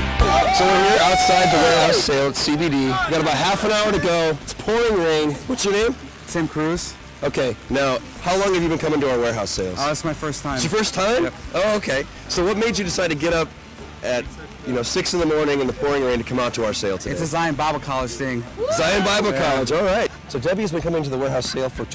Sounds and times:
Speech: 0.6s - 21.9s.

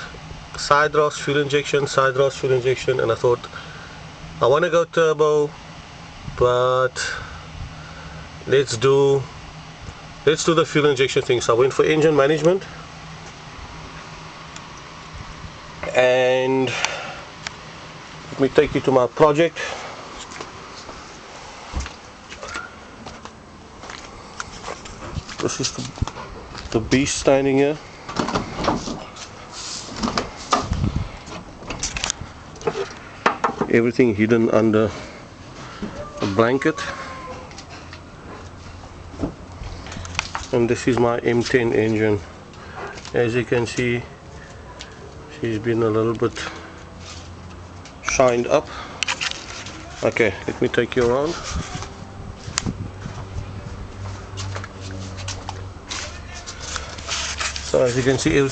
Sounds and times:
Speech: 0.6s - 3.5s, 4.4s - 5.6s, 6.4s - 7.2s, 8.5s - 9.3s, 10.3s - 12.7s, 15.8s - 16.8s, 18.3s - 19.6s, 26.7s - 27.8s, 33.7s - 35.0s, 36.0s - 37.1s, 40.5s - 42.3s, 43.1s - 44.1s, 45.3s - 46.6s, 48.0s - 48.7s, 49.8s - 51.9s, 57.7s - 58.5s.

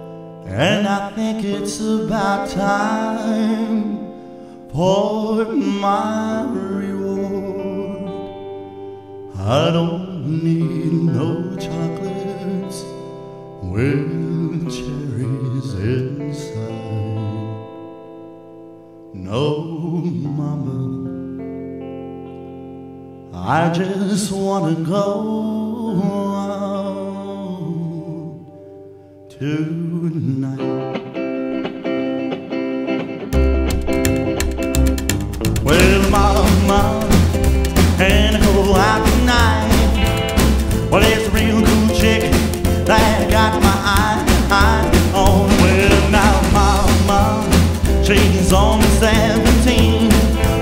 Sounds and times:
Music: 0.0s - 50.6s.

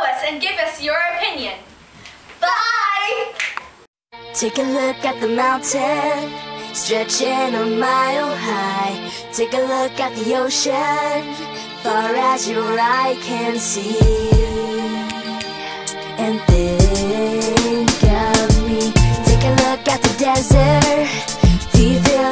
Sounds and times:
Music: 4.2s - 22.3s.

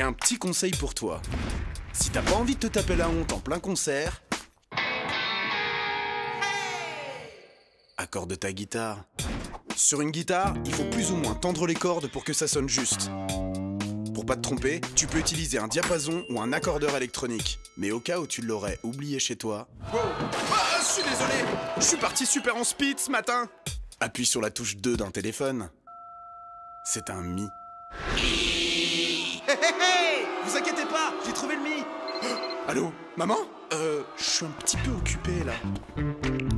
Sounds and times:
Speech: 0.0s - 1.3s, 2.0s - 4.2s, 8.0s - 9.1s, 9.8s - 13.3s, 14.2s - 25.8s, 26.9s - 27.5s, 29.2s - 35.7s
Music: 0.0s - 7.1s, 9.2s - 19.4s, 22.8s - 25.1s, 34.6s - 36.5s.

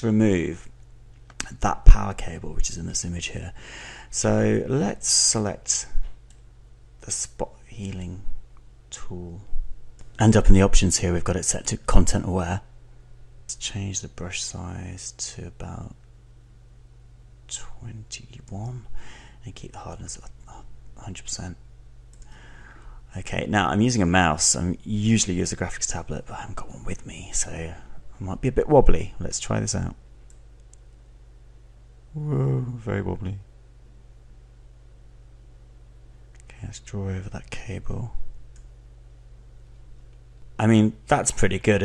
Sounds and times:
Speech: 0.0s - 0.7s, 1.4s - 6.0s, 7.0s - 8.3s, 8.9s - 9.5s, 10.2s - 12.7s, 13.5s - 16.0s, 17.5s - 21.6s, 23.1s - 30.0s, 32.2s - 33.5s, 36.4s - 38.2s, 40.6s - 41.8s.

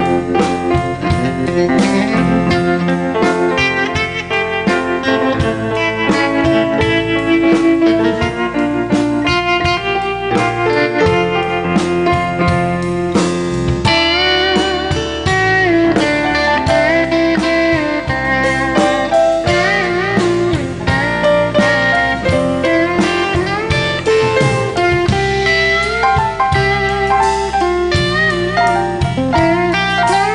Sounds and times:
Music: 0.0s - 30.3s.

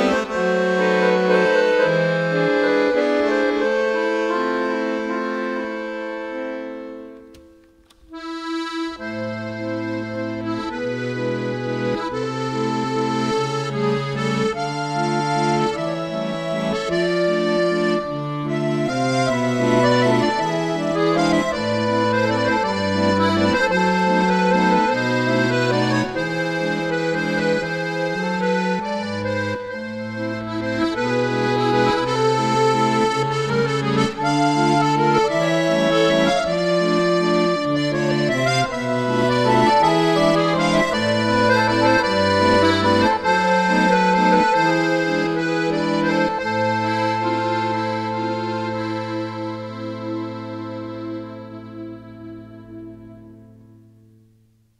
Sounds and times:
Accordion: 0.0s - 54.7s.

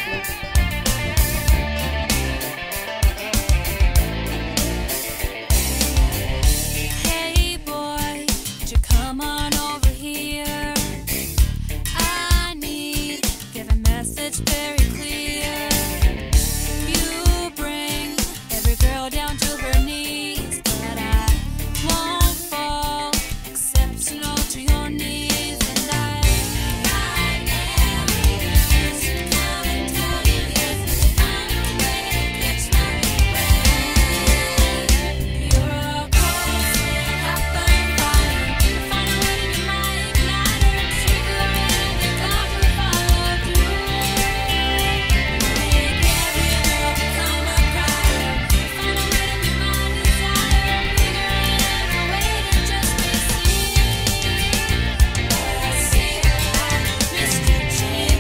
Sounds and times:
Bluegrass: 0.0s - 7.1s, 23.5s - 58.2s.

